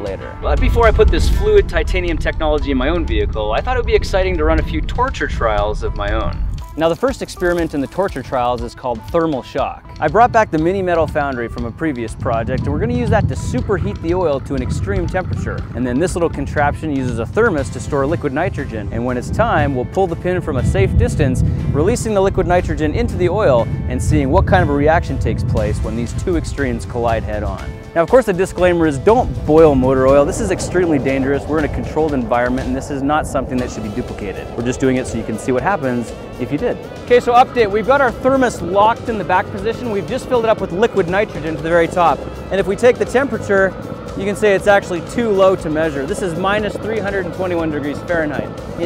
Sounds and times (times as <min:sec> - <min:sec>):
Music: 0:00.0 - 0:48.8
Speech: 0:00.0 - 0:48.8.